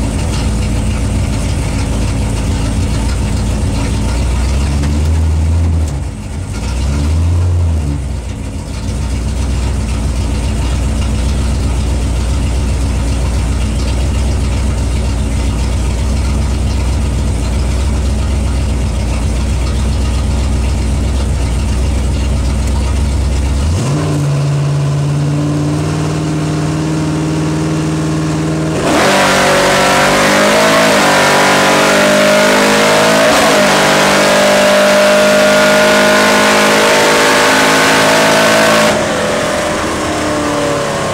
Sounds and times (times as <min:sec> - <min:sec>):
Vehicle: 0:00.0 - 0:41.1.